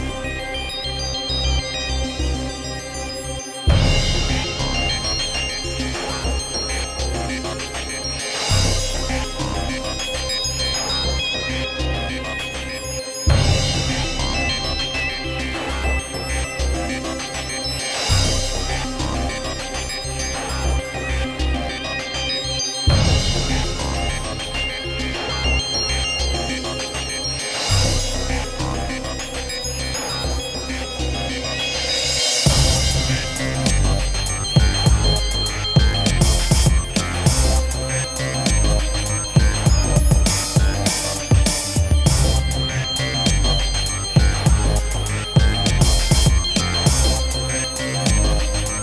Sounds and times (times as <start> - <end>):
Music: 0.0 - 48.8.